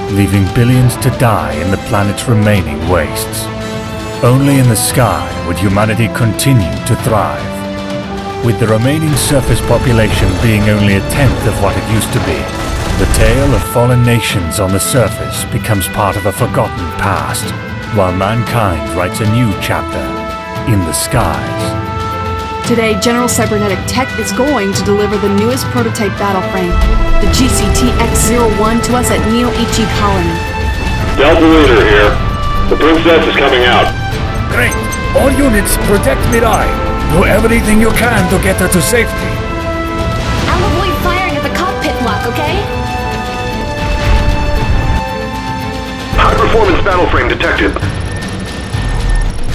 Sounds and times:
Music: 0.0s - 49.5s.

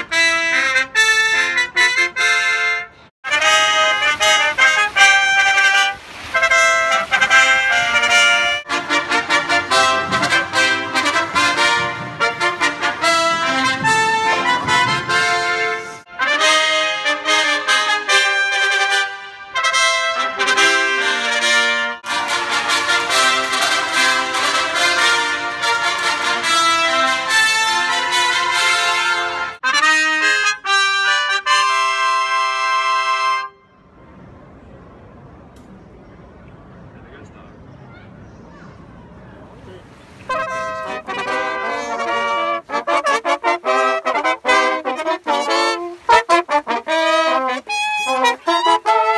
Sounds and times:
Happy music: 0.0s - 33.6s, 40.3s - 49.1s.

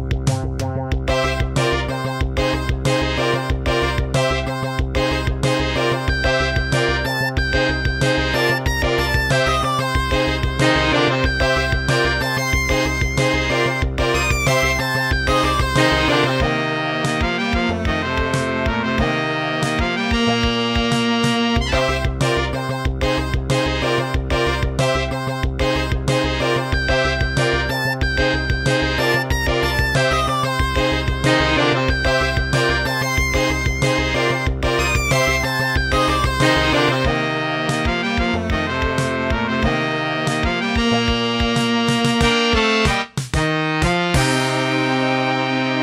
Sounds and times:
Music: 0.0s - 45.8s.

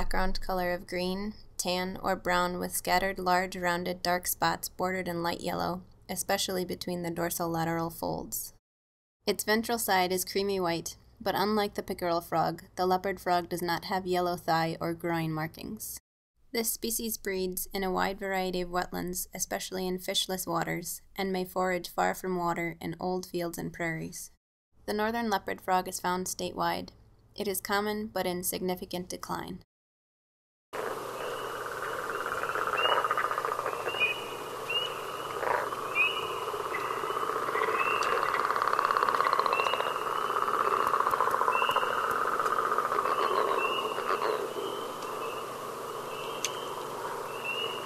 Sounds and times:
Speech: 0.0s - 8.6s, 9.3s - 16.0s, 16.6s - 29.6s.

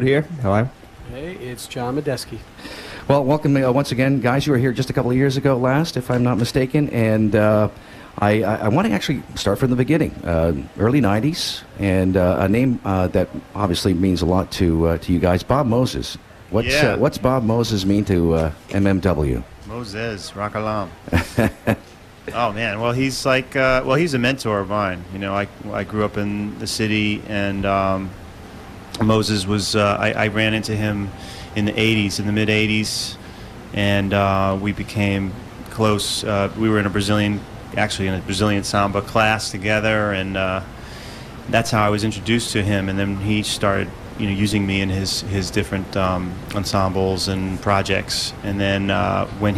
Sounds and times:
Speech: 0.0s - 2.4s, 3.1s - 21.0s, 22.3s - 28.2s, 29.0s - 33.2s, 33.8s - 40.7s, 41.5s - 49.5s.

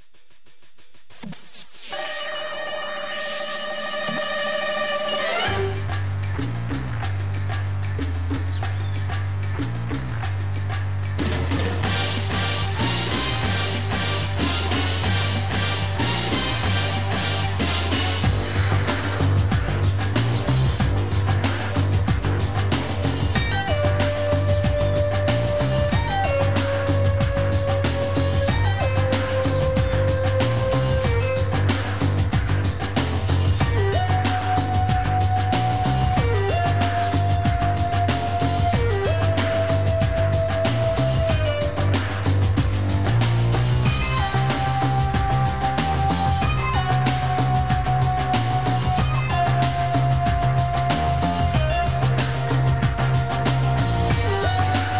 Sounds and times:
Music: 0.0s - 55.0s.

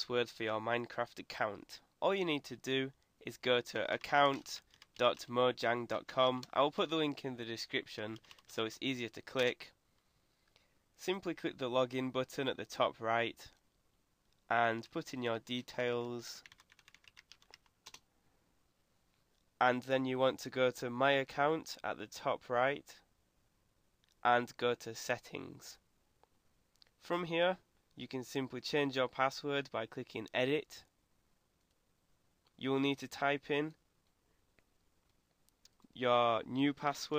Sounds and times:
Computer keyboard: 4.0s - 5.3s, 8.2s - 8.6s, 16.4s - 18.0s.

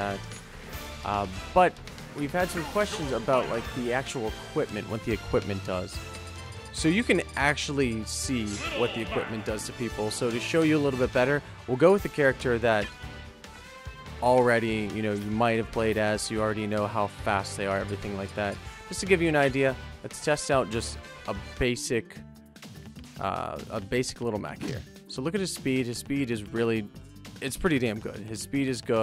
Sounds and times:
Speech: 0.0s - 0.2s, 1.0s - 6.0s, 6.8s - 12.9s, 14.2s - 22.2s, 23.2s - 29.0s
Music: 0.0s - 29.0s.

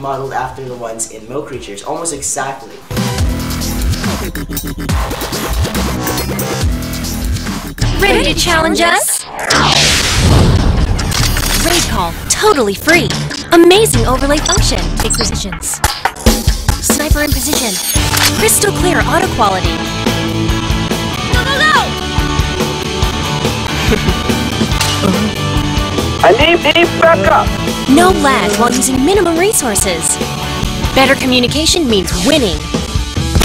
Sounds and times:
Music: 2.6s - 33.4s
Speech: 8.0s - 9.2s.

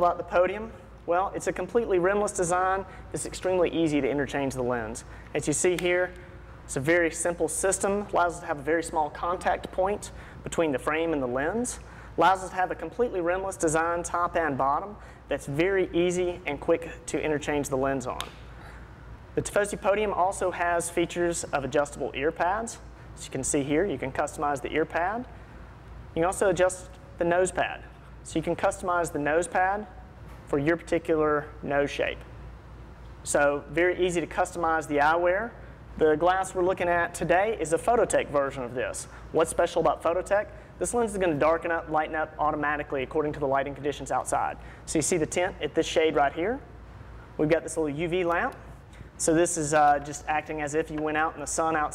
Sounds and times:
Speech: 0.0s - 18.3s, 19.4s - 25.3s, 26.2s - 32.3s, 33.2s - 46.7s, 47.4s - 51.9s.

